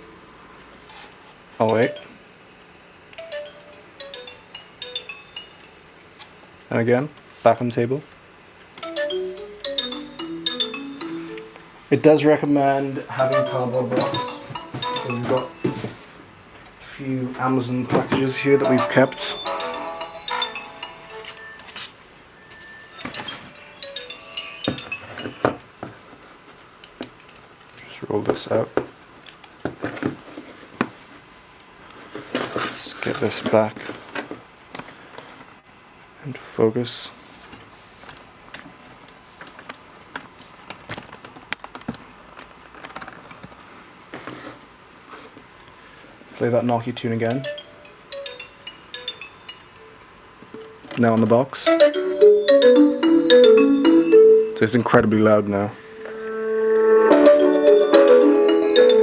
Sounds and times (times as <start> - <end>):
Speech: 6.7 - 8.1, 11.9 - 14.4, 16.8 - 19.4, 27.8 - 28.8, 32.8 - 33.9, 36.2 - 37.2, 46.4 - 47.5, 51.0 - 51.7, 54.6 - 55.8.